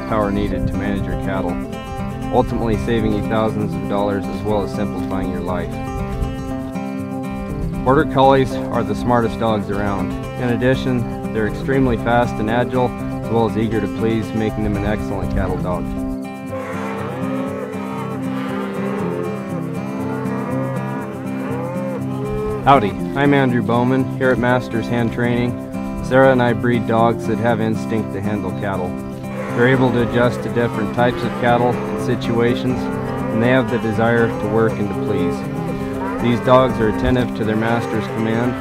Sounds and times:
Moo: 16.5s - 22.9s, 29.3s - 38.6s.

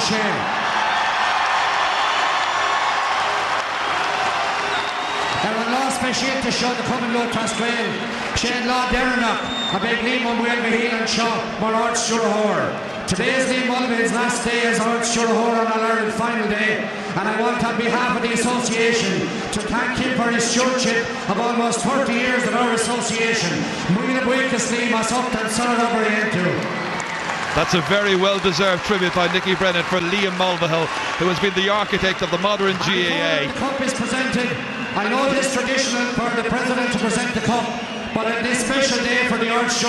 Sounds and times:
Male speech, man speaking: 0.0s - 0.4s, 5.4s - 26.6s, 27.6s - 39.8s
Narration, monologue: 5.4s - 26.7s.

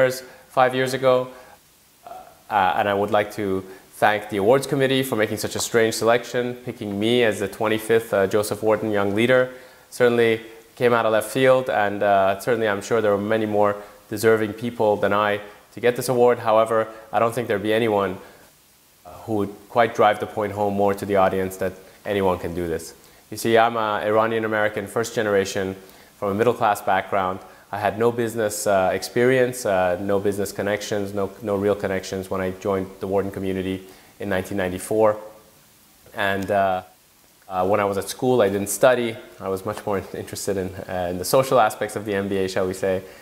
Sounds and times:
Male speech, man speaking: 0.0s - 1.4s, 2.1s - 18.2s, 19.1s - 35.3s, 36.1s - 43.1s
Narration, monologue: 0.0s - 43.2s.

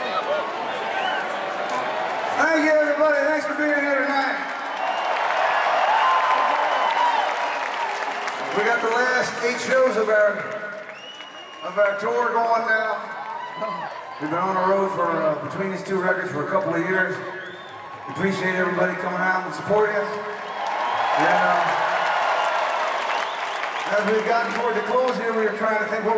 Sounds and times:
Speech: 2.4s - 4.5s, 8.5s - 10.5s, 11.6s - 17.3s, 18.1s - 20.3s, 21.2s - 21.8s, 23.9s - 26.1s.

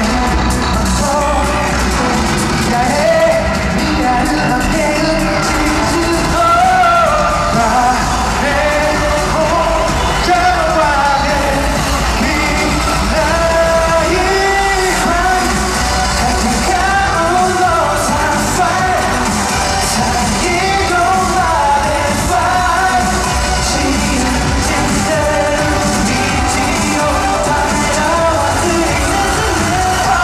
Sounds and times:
Dance music: 0.0s - 30.2s.

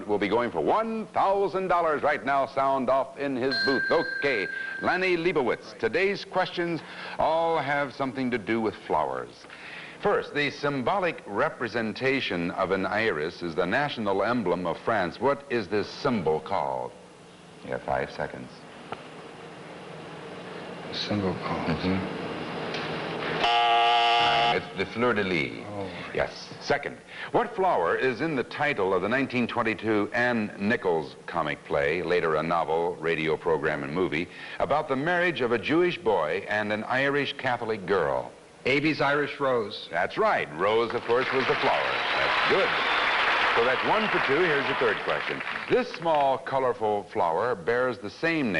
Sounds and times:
Speech: 0.0s - 9.4s, 10.0s - 17.0s, 17.6s - 18.6s, 20.9s - 22.1s, 24.3s - 42.7s, 43.6s - 48.6s.

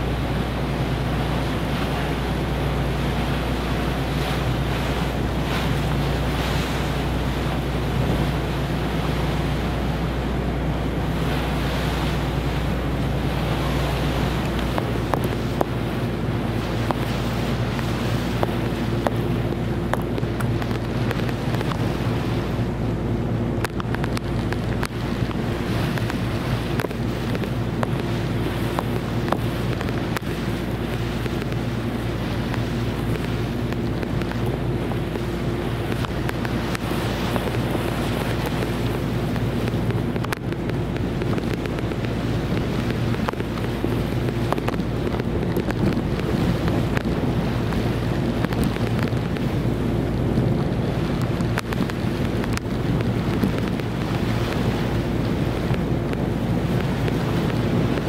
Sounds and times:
Ship: 0.0s - 58.0s.

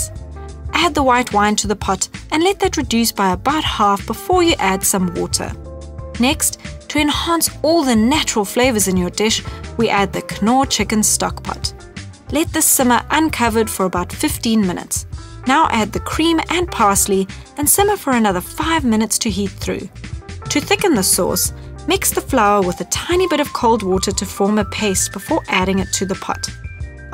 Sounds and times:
Music: 0.0s - 27.1s
Speech: 0.8s - 5.6s, 6.2s - 11.7s, 12.3s - 19.9s, 20.5s - 26.6s.

